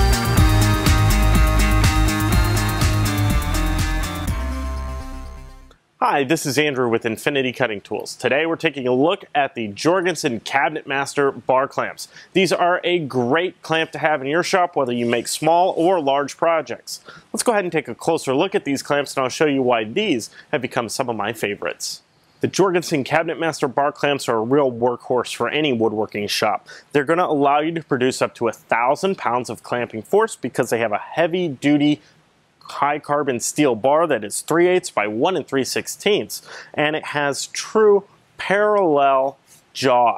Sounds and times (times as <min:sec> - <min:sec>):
Speech: 0:06.0 - 0:32.0, 0:32.6 - 0:40.1.